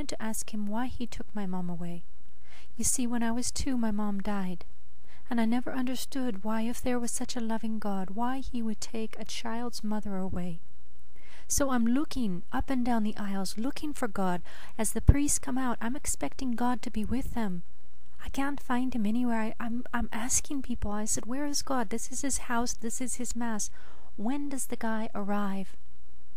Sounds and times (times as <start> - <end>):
Speech: 0.0 - 2.0, 2.8 - 4.7, 5.3 - 10.6, 11.5 - 17.6, 18.2 - 25.8.